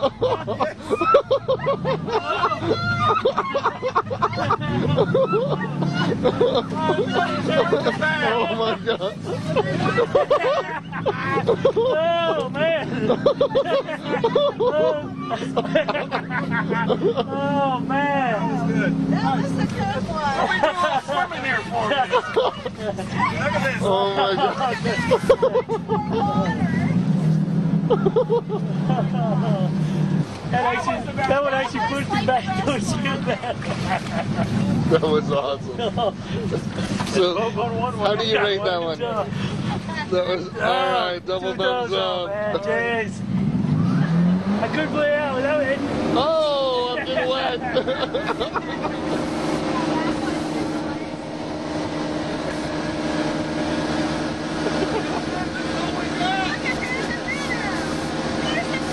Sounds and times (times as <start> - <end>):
Boat, Water vehicle: 0.0 - 58.9.